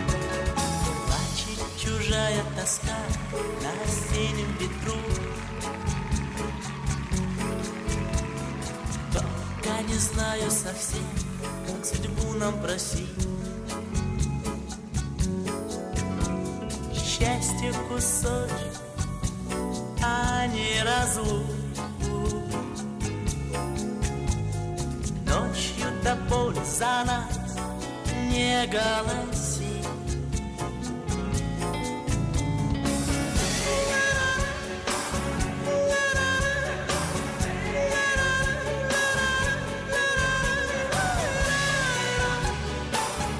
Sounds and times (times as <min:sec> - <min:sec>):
Music: 0:00.0 - 0:43.3.